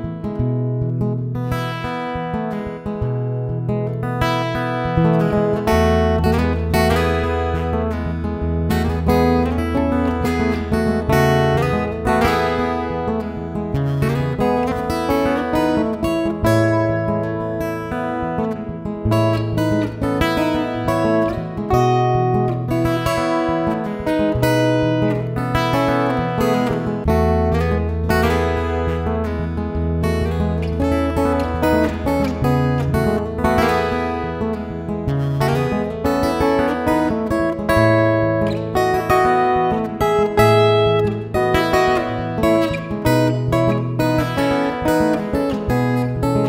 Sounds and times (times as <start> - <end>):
Acoustic guitar: 0.0 - 46.4.